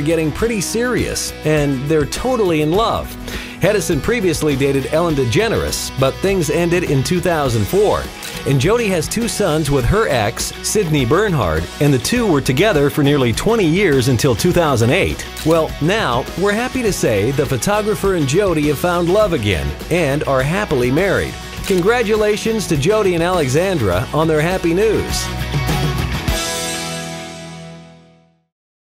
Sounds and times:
Speech: 0.0 - 25.3
Music: 0.0 - 28.6.

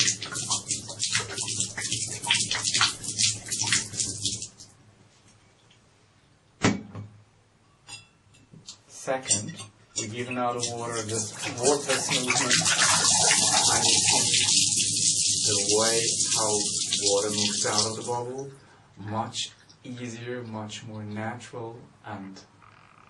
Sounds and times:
Inside, small room: 0.0 - 23.0
Speech: 8.9 - 14.5, 15.4 - 22.5.

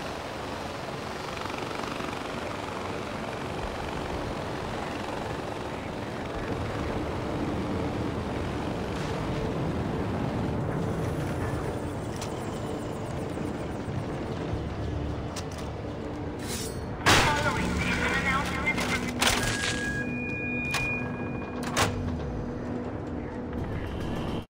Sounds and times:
Music: 10.3 - 24.5
Speech: 17.2 - 19.1.

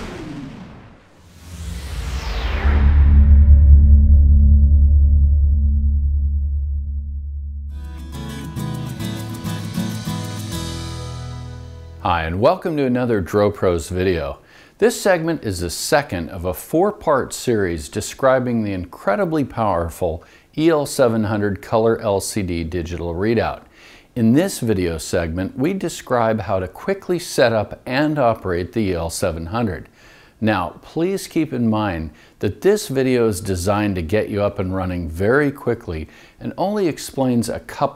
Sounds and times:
Speech: 12.0 - 37.9.

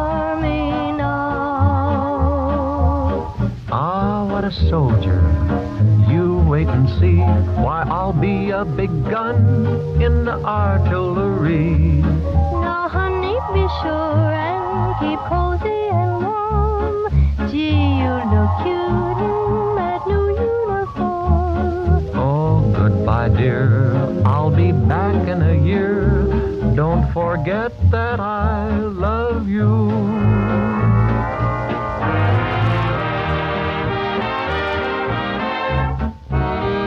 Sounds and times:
Electronic music: 12.2 - 21.8, 30.0 - 36.8.

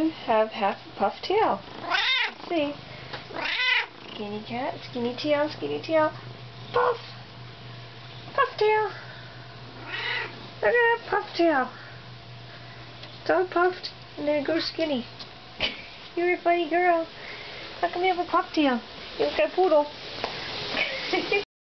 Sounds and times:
Speech: 0.0 - 1.6, 2.4 - 2.8, 4.2 - 6.2, 8.4 - 9.0, 10.6 - 11.8, 13.2 - 15.1, 16.2 - 17.1, 17.8 - 20.0.

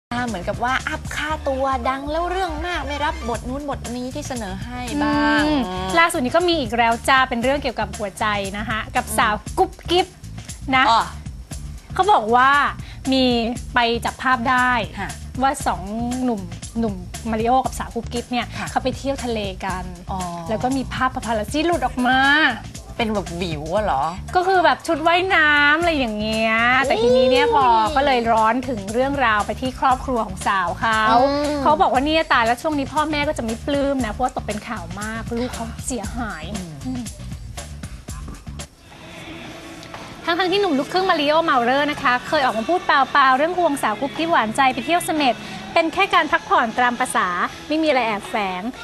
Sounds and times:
Music: 0.0 - 48.8
Speech: 0.2 - 10.1, 12.0 - 37.2.

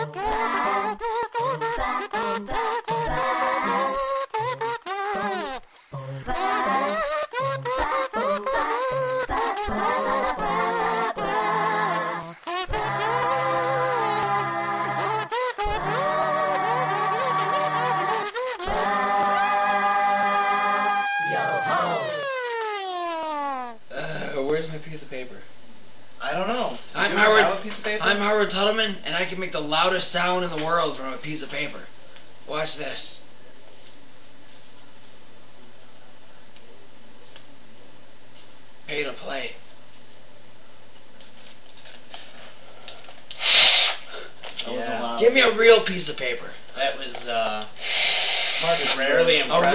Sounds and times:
Music: 0.0 - 22.0.

